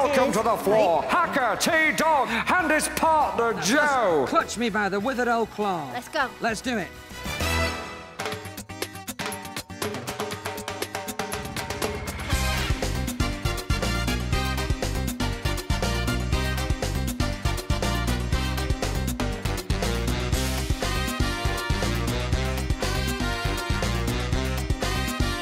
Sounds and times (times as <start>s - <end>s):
Speech: 0.0s - 6.9s
Music: 0.0s - 25.4s.